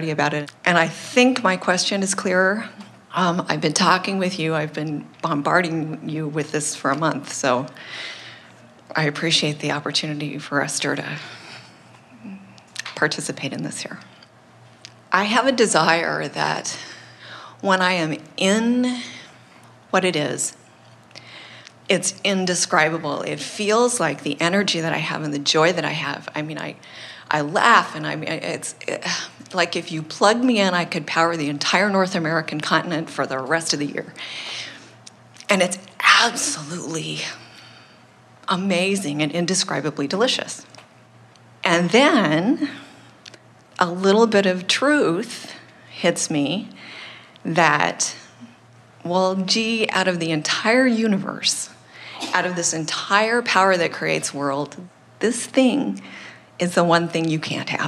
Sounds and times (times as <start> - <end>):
Speech: 0.0 - 7.8, 8.9 - 11.4, 12.2 - 14.1, 15.2 - 16.9, 17.6 - 19.2, 19.9 - 20.6, 21.9 - 34.2, 35.4 - 37.4, 38.5 - 40.7, 41.7 - 42.8, 43.8 - 46.8, 47.5 - 48.4, 49.1 - 57.8.